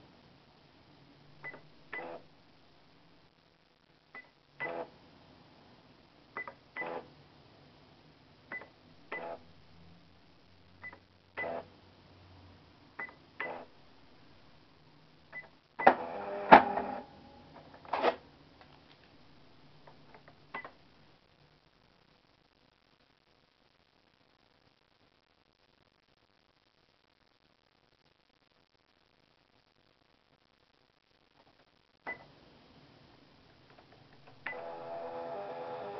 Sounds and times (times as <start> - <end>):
Cash register: 15.8 - 17.1, 34.4 - 35.9.